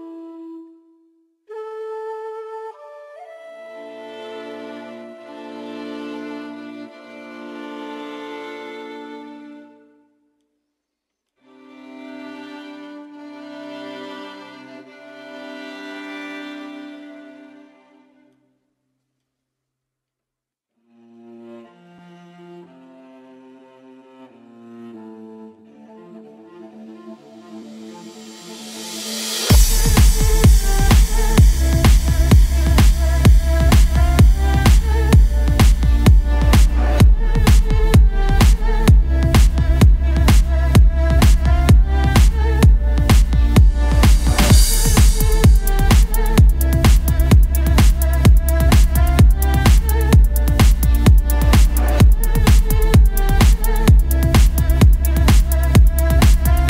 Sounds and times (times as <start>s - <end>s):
Cello: 2.8s - 10.1s, 11.4s - 18.4s, 20.8s - 56.6s.